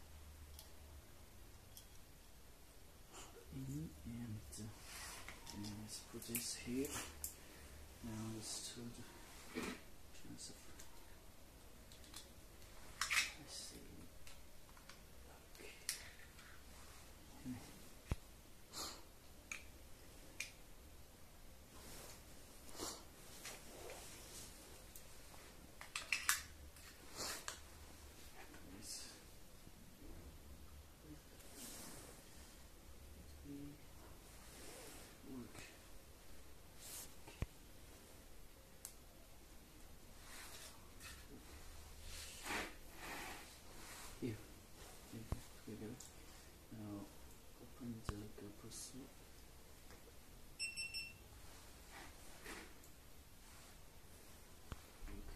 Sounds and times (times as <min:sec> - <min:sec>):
Speech: 0:03.5 - 0:04.8, 0:05.5 - 0:07.1, 0:08.0 - 0:09.2, 0:46.7 - 0:49.2.